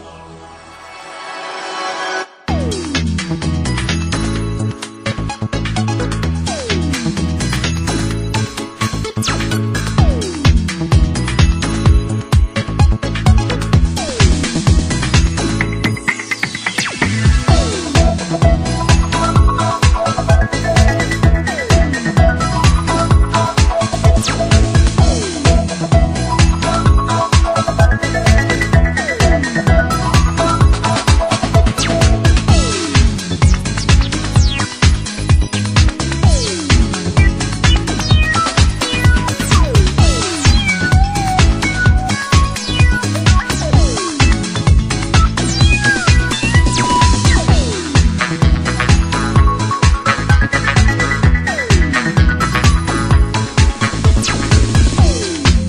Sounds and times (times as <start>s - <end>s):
Video game music: 0.0s - 55.6s.